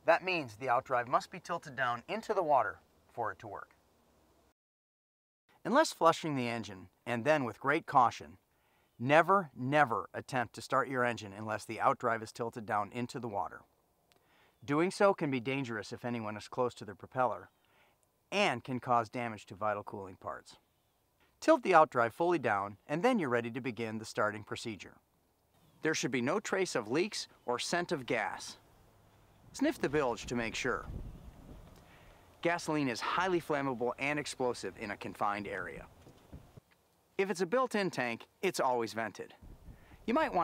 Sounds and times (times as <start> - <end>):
Speech: 0.0 - 3.8, 5.6 - 8.4, 9.0 - 13.7, 14.6 - 17.5, 18.3 - 20.6, 21.4 - 25.0, 25.8 - 28.6, 29.6 - 30.9, 32.4 - 35.9, 37.2 - 39.4, 40.1 - 40.4.